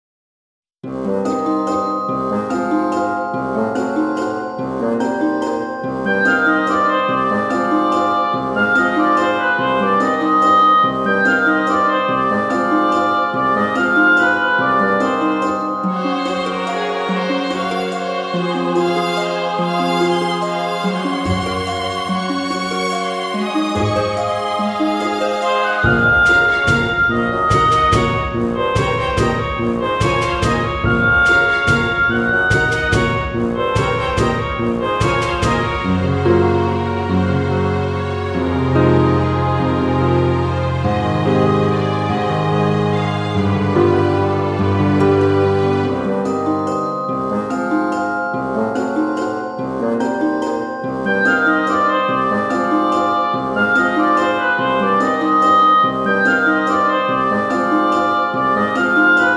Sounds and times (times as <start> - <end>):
Soundtrack music: 0.8 - 59.3.